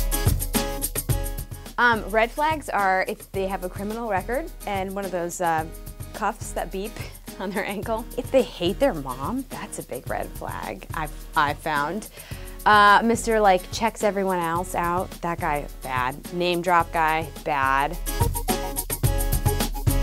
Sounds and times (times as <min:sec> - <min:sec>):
Music: 0:00.0 - 0:20.0
Speech: 0:01.8 - 0:12.1, 0:12.7 - 0:18.0.